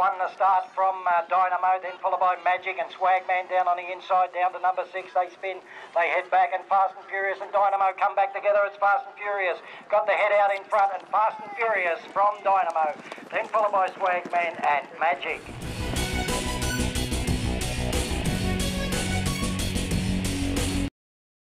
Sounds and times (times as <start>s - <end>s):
Speech: 0.0s - 15.4s
Clip-clop: 0.0s - 16.1s
Music: 15.4s - 20.9s.